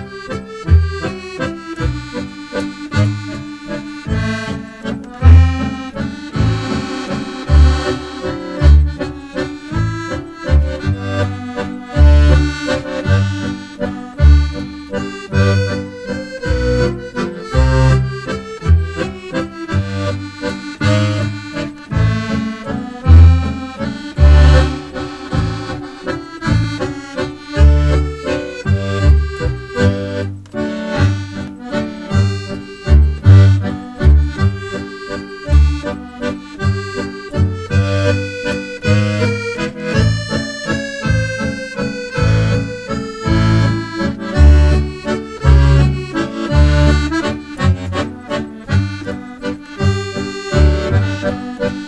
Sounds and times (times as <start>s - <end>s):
Music: 0.0s - 51.8s.